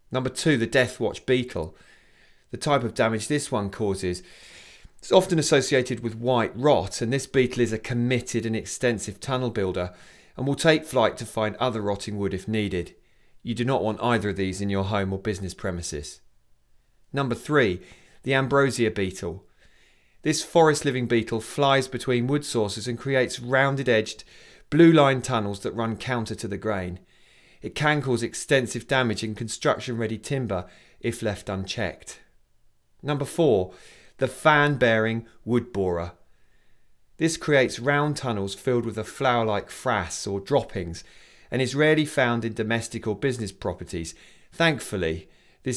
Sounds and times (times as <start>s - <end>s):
Speech: 0.1s - 1.8s, 2.5s - 4.3s, 5.0s - 16.3s, 17.1s - 19.5s, 20.2s - 27.0s, 27.6s - 32.3s, 33.0s - 36.2s, 37.2s - 45.7s.